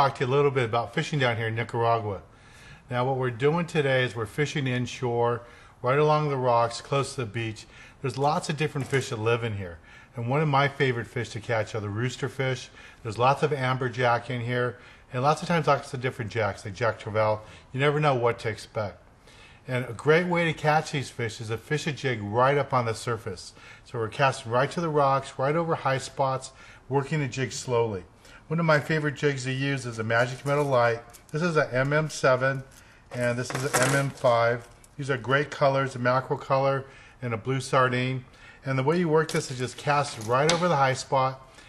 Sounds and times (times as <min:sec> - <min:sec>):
Speech: 0:00.0 - 0:02.3, 0:02.9 - 0:19.0, 0:19.6 - 0:41.4.